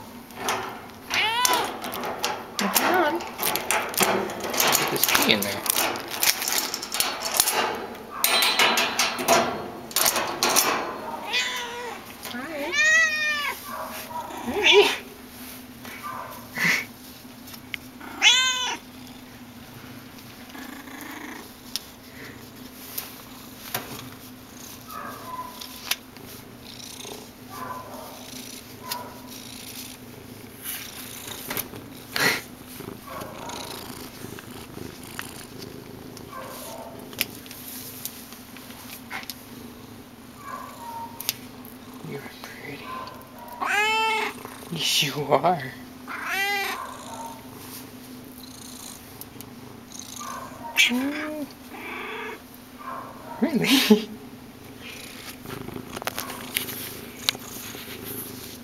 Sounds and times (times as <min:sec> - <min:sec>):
Domestic animals, pets: 0:10.9 - 0:15.0, 0:18.0 - 0:19.3, 0:20.3 - 0:21.6, 0:24.4 - 0:37.4, 0:39.0 - 0:44.7, 0:46.0 - 0:53.5, 0:54.7 - 0:58.6.